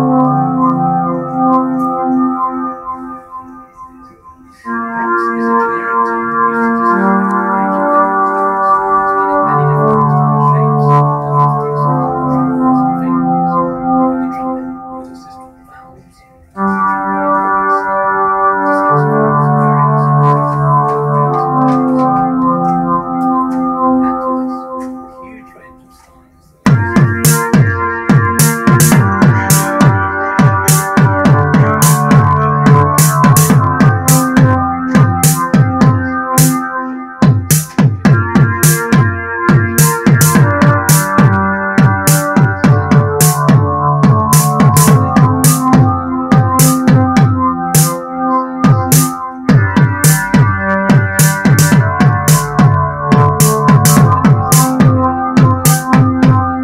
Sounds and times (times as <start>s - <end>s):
Musical instrument: 0.0s - 56.6s.